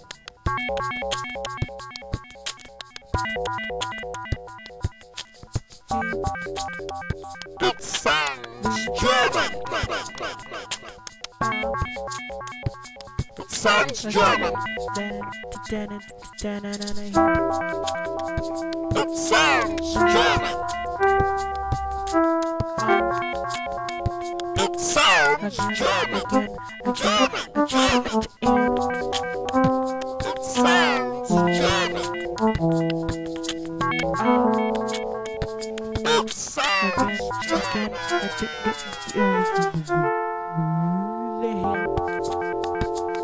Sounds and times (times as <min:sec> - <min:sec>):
Music: 0:00.0 - 0:43.2
Speech: 0:07.6 - 0:11.0, 0:13.4 - 0:17.2, 0:18.9 - 0:20.6, 0:24.6 - 0:28.3, 0:30.2 - 0:32.2, 0:36.0 - 0:40.0, 0:40.6 - 0:41.8.